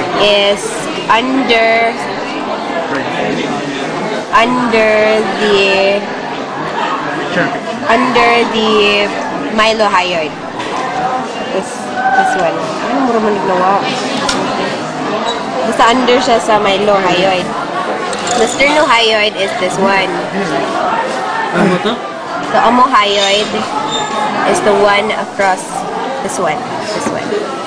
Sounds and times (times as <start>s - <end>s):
Female speech, woman speaking: 0.0s - 2.2s, 4.3s - 6.1s, 7.9s - 10.4s, 11.5s - 14.0s, 15.7s - 17.5s, 18.3s - 20.3s, 22.5s - 23.7s, 24.5s - 27.4s.